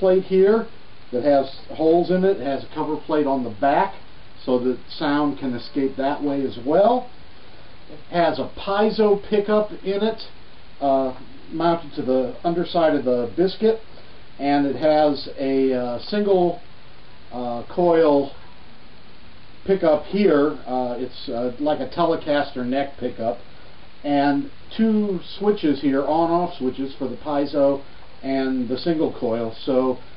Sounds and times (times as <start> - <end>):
Speech: 0.0 - 7.1, 7.9 - 16.6, 17.3 - 18.4, 19.6 - 30.1.